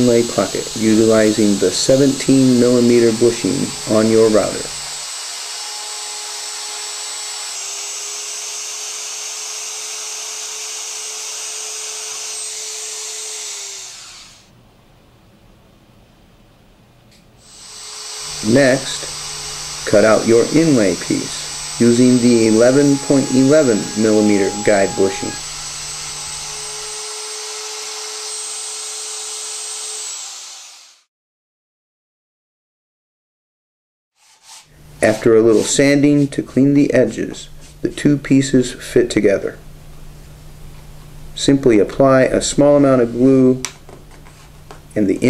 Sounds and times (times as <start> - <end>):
Speech: 0.0 - 4.7, 18.4 - 19.1, 19.9 - 25.4, 35.0 - 39.6, 41.4 - 43.7, 45.0 - 45.3
Power tool: 0.0 - 14.6, 17.4 - 31.1.